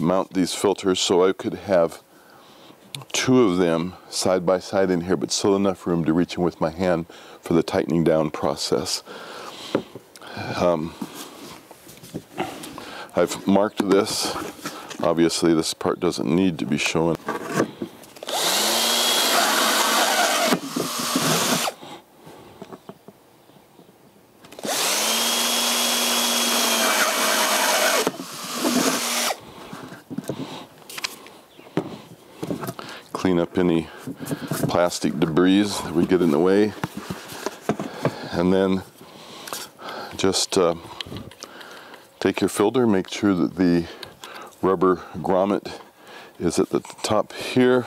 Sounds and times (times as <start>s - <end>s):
Speech: 0.0s - 2.0s, 3.0s - 9.0s, 10.4s - 11.0s, 13.1s - 14.4s, 15.0s - 17.2s, 33.2s - 33.9s, 34.6s - 36.8s, 38.3s - 38.9s, 40.2s - 40.8s, 42.2s - 44.0s, 44.6s - 45.8s, 46.4s - 47.8s.